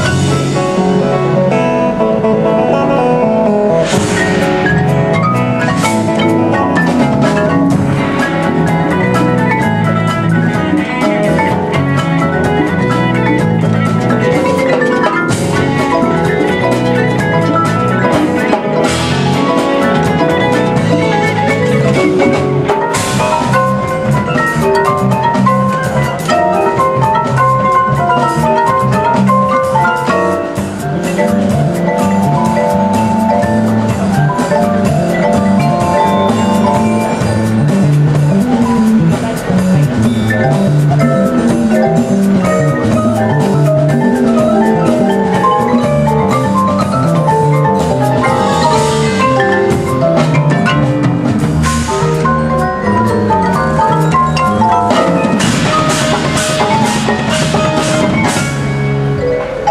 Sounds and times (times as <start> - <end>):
Percussion: 0.0 - 59.7.